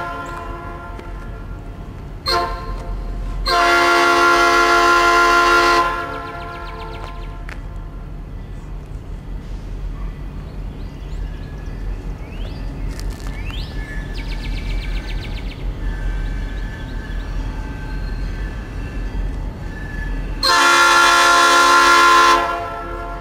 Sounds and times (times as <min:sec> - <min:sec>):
Outside, rural or natural: 0:00.0 - 0:23.2
Train: 0:00.0 - 0:23.2.